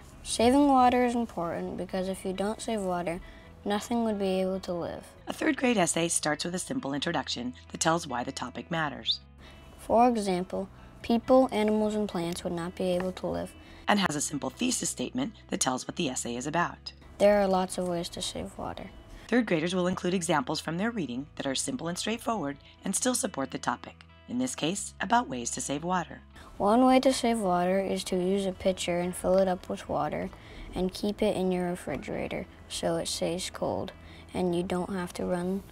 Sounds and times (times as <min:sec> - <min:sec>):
Music: 0:00.0 - 0:35.7
Speech: 0:00.2 - 0:09.2, 0:09.8 - 0:35.7.